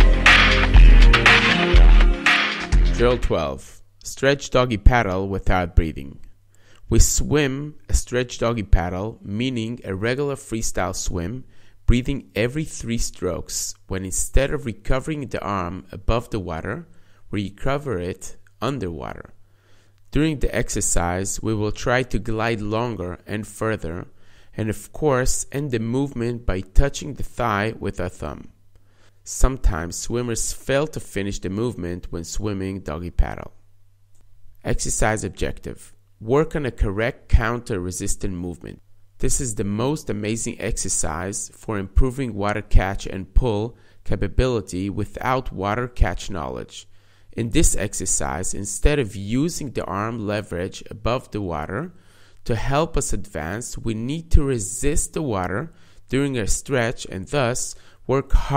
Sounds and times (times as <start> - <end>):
Speech: 2.9 - 19.4, 20.1 - 28.6, 29.3 - 33.6, 34.6 - 58.5.